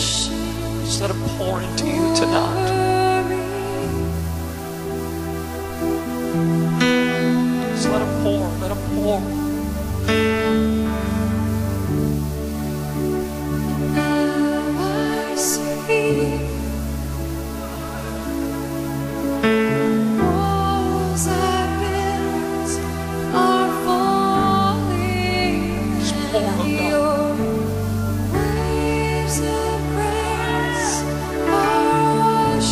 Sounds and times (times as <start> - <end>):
Music: 0.0 - 32.7
Singing: 13.9 - 16.9, 20.2 - 32.7.